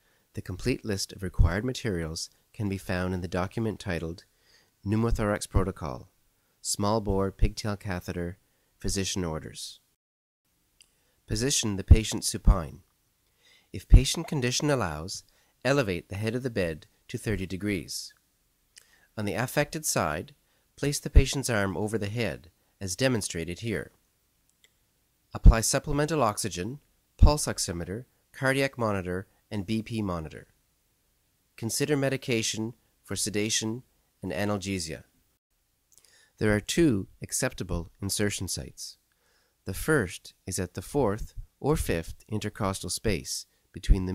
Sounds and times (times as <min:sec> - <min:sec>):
Speech: 0:00.3 - 0:09.9, 0:11.3 - 0:12.9, 0:13.7 - 0:18.2, 0:19.2 - 0:24.0, 0:25.3 - 0:30.6, 0:31.6 - 0:35.1, 0:36.4 - 0:39.0, 0:39.6 - 0:44.1.